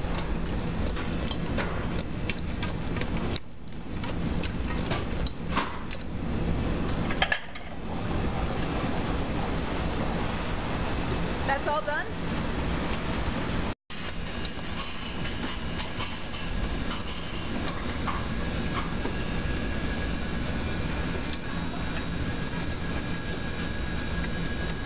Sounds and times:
Speech: 0:11.5 - 0:12.2.

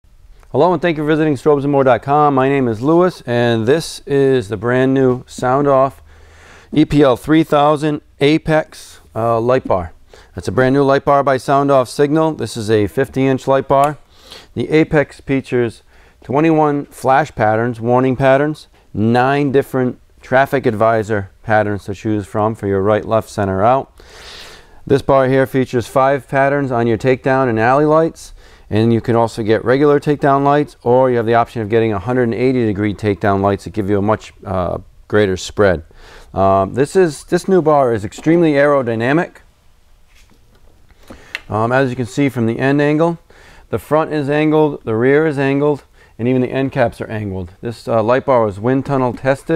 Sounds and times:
Speech: 0:00.5 - 0:06.0, 0:06.8 - 0:14.0, 0:14.6 - 0:23.9, 0:24.9 - 0:39.4, 0:41.5 - 0:49.5.

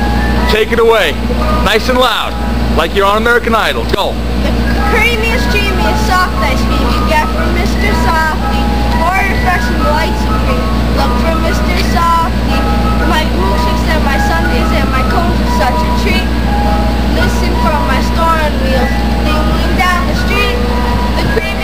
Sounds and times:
Music: 0:00.0 - 0:03.3, 0:04.5 - 0:21.6.

